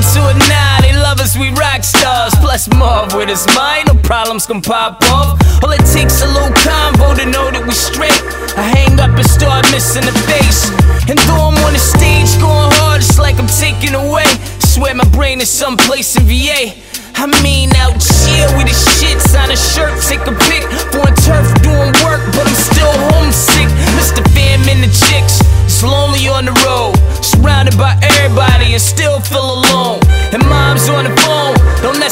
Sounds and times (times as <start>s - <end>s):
Dance music: 0.0s - 32.1s
Rhythm and blues: 0.0s - 32.1s.